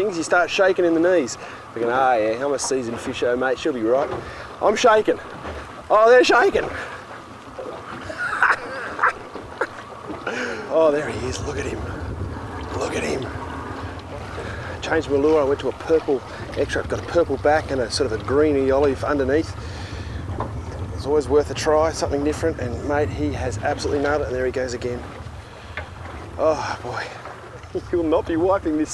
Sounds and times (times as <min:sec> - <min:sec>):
Speech: 0:00.0 - 0:05.2, 0:05.9 - 0:06.8, 0:10.7 - 0:11.9, 0:12.7 - 0:13.4, 0:14.8 - 0:19.6, 0:20.9 - 0:25.0, 0:26.4 - 0:28.9
Outside, rural or natural: 0:00.0 - 0:28.9.